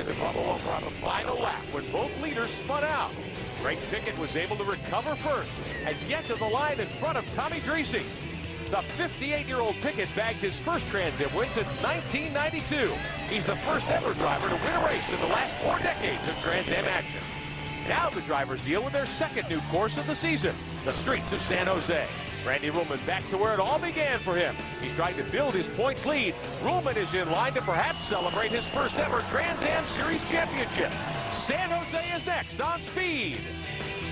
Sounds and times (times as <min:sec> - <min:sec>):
Speech: 0:00.0 - 0:08.1, 0:08.7 - 0:17.2, 0:17.9 - 0:33.4
Music: 0:00.0 - 0:34.1.